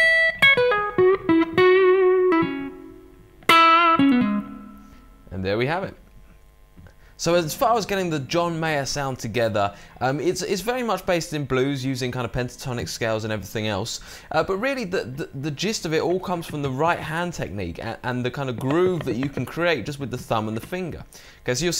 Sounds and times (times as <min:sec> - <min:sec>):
Guitar: 0:00.0 - 0:08.4, 0:15.1 - 0:21.8
Speech: 0:05.3 - 0:06.0, 0:07.2 - 0:21.8.